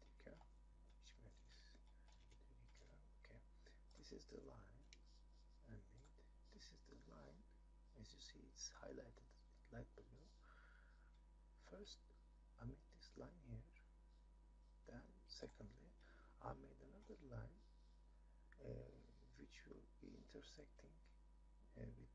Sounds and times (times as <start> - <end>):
Speech: 0.0 - 0.4, 1.0 - 4.9, 5.6 - 10.6, 11.6 - 13.8, 14.9 - 17.7, 18.6 - 21.1, 21.7 - 22.1.